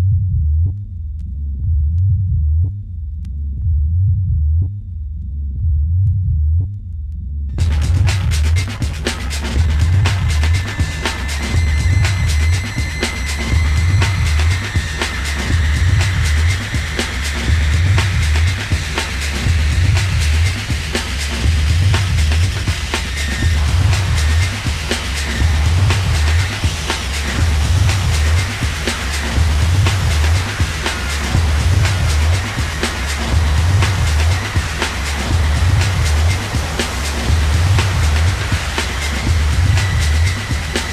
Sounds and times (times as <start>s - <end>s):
Techno: 7.5s - 40.9s.